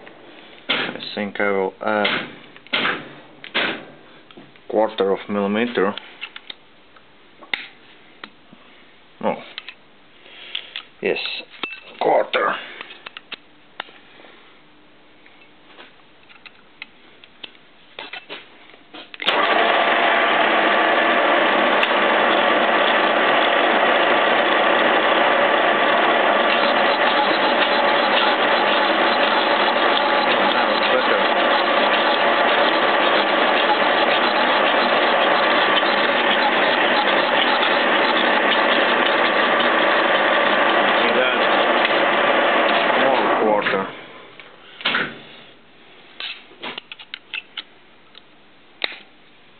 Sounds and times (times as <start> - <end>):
Speech: 1.0 - 2.2, 4.7 - 6.0, 9.2 - 9.6, 11.0 - 12.7, 30.5 - 31.3, 41.0 - 41.5, 42.9 - 44.0.